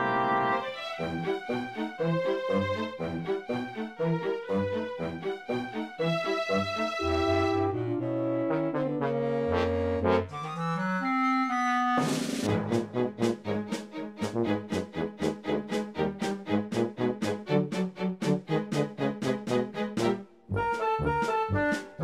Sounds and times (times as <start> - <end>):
Music: 0.0 - 22.0.